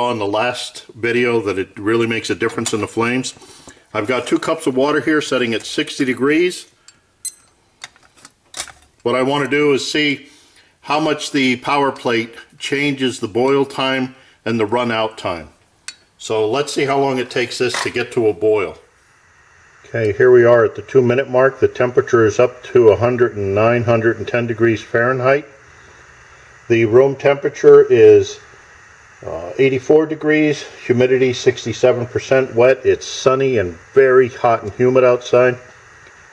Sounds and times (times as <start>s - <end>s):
Speech: 0.0s - 6.8s, 9.0s - 15.6s, 16.2s - 18.9s, 19.9s - 25.6s, 26.7s - 28.4s, 29.2s - 35.7s.